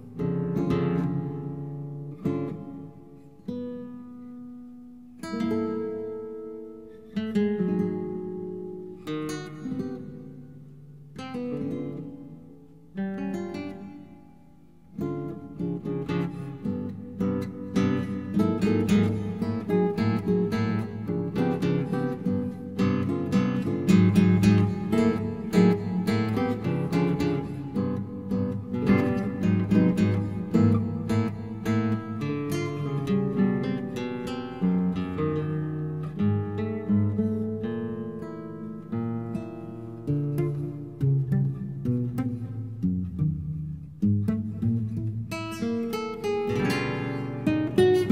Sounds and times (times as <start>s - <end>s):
Music: 0.0s - 48.1s.